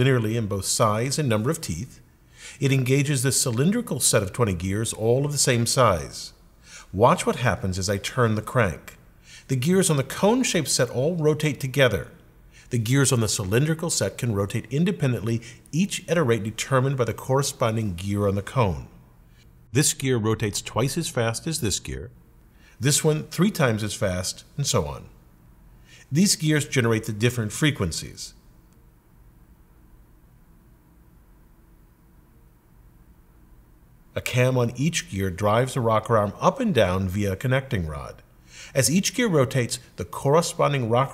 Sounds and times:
Speech: 0:00.0 - 0:19.0, 0:19.7 - 0:22.2, 0:22.8 - 0:25.2, 0:26.0 - 0:28.4, 0:34.2 - 0:41.1.

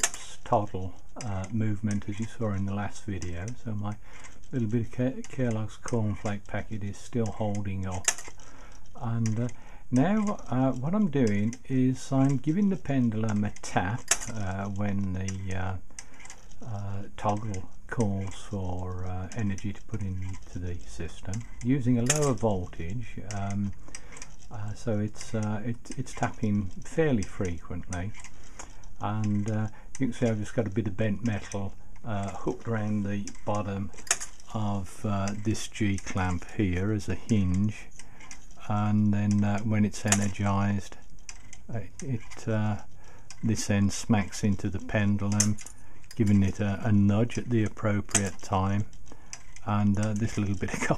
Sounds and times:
Speech: 0:00.0 - 0:08.1, 0:09.0 - 0:15.8, 0:16.6 - 0:23.8, 0:24.5 - 0:28.2, 0:29.0 - 0:38.0, 0:38.6 - 0:41.0, 0:41.7 - 0:45.6, 0:46.2 - 0:48.9, 0:49.6 - 0:50.9
Tick-tock: 0:00.0 - 0:50.9.

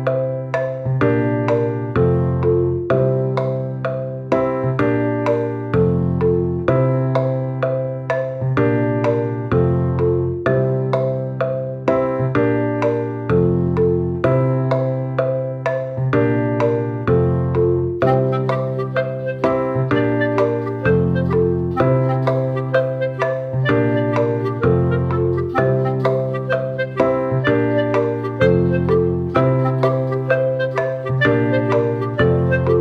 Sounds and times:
Music: 0:00.0 - 0:32.8.

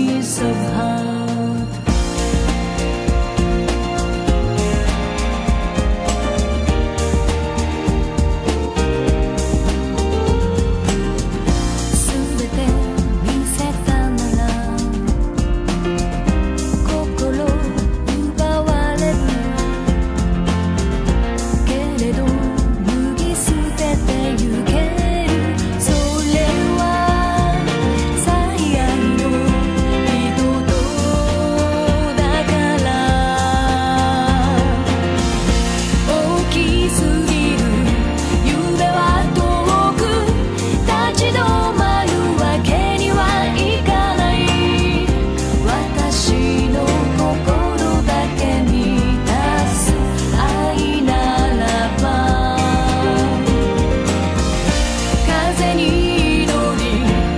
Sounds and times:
Happy music: 0:00.0 - 0:57.3.

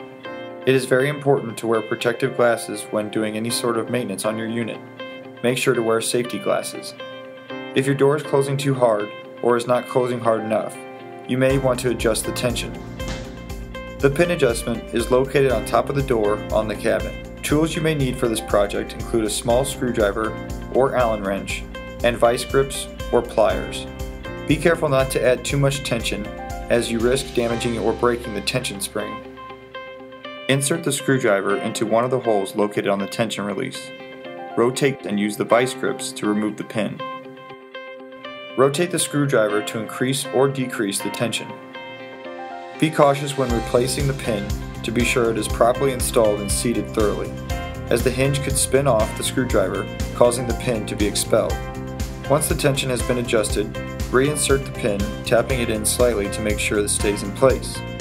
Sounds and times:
Music: 0:00.0 - 0:58.0
Speech: 0:00.7 - 0:04.8, 0:05.4 - 0:07.0, 0:07.8 - 0:12.8, 0:14.0 - 0:23.9, 0:24.5 - 0:29.3, 0:30.5 - 0:33.9, 0:34.6 - 0:37.1, 0:38.6 - 0:41.6, 0:42.8 - 0:47.3, 0:47.9 - 0:51.6, 0:52.3 - 0:57.8.

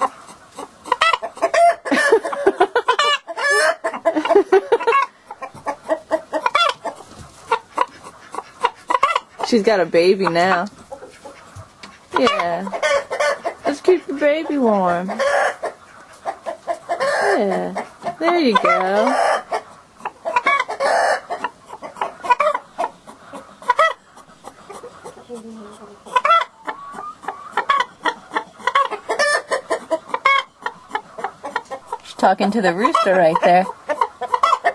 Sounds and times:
Cluck: 0:00.0 - 0:34.7.

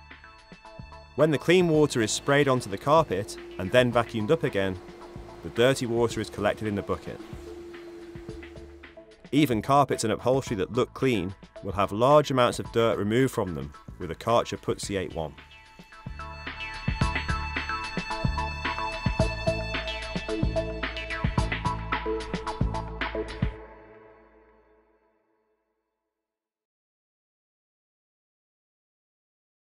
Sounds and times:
Music: 0:00.0 - 0:26.1.

